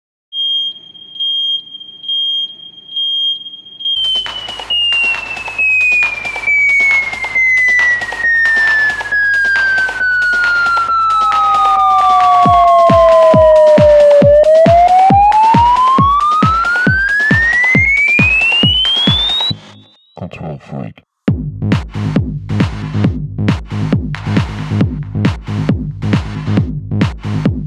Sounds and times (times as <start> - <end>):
Music: 4.0 - 20.0, 21.3 - 27.6.